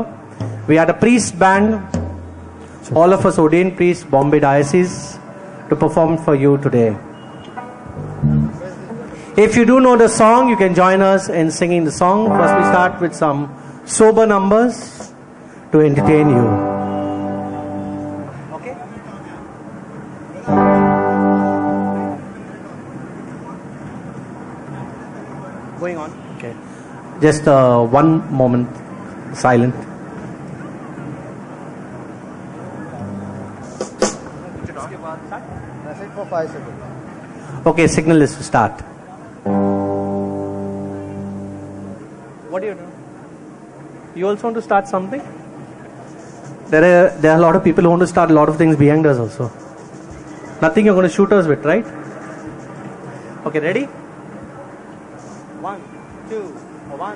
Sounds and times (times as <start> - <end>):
Speech: 2.9 - 7.0, 8.6 - 15.1, 15.8 - 16.6, 27.2 - 29.8, 34.4 - 37.0, 37.6 - 39.4, 44.2 - 45.3, 46.7 - 49.6, 55.6 - 57.1.